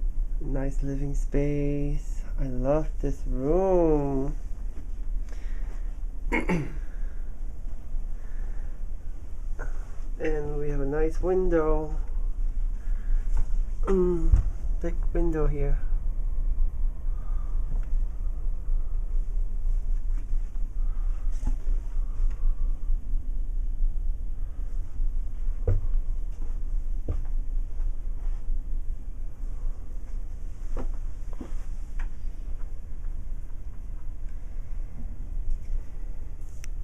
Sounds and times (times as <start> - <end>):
Speech: 0.4 - 4.4, 10.2 - 12.0, 13.9 - 15.9.